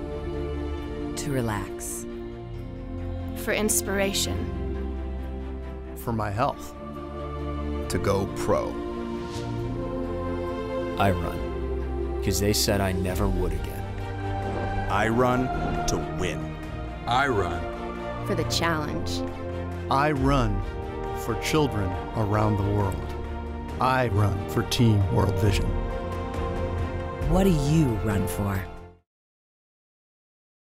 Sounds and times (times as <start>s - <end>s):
Music: 0.0s - 29.1s
Speech: 17.1s - 17.6s, 23.8s - 25.8s, 27.3s - 28.7s.